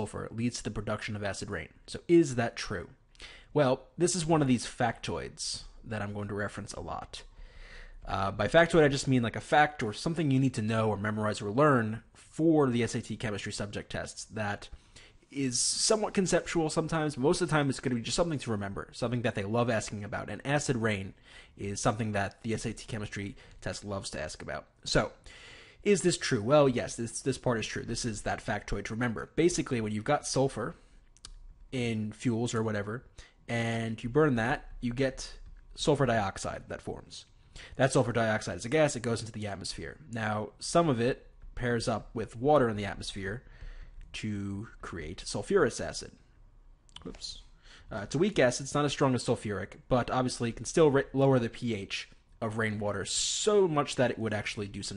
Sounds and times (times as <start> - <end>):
Speech: 0.0 - 7.3, 8.0 - 25.2, 25.8 - 30.9, 31.7 - 43.5, 44.1 - 46.3, 47.0 - 54.9.